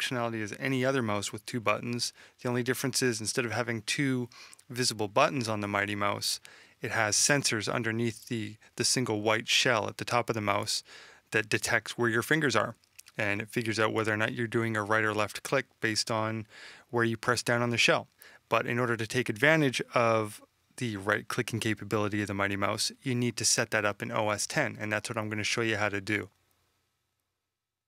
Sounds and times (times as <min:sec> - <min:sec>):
Speech: 0:00.0 - 0:26.3.